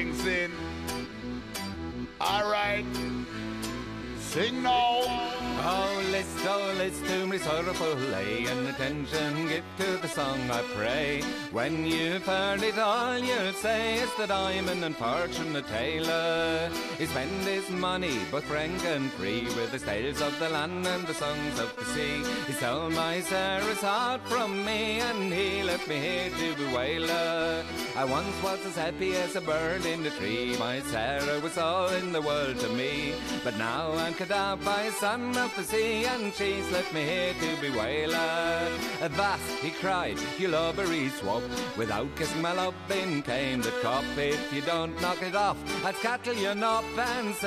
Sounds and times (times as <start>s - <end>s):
Music: 0.0s - 47.4s
Speech: 2.2s - 2.9s.